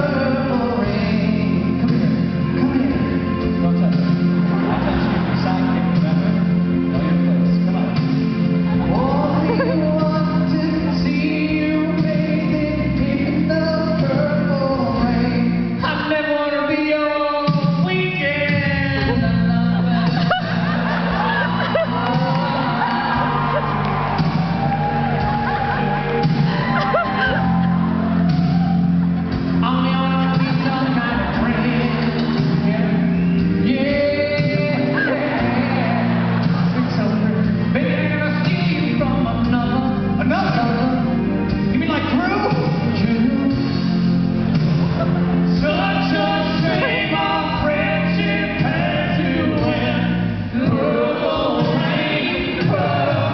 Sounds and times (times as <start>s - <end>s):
Music: 0.0s - 53.3s.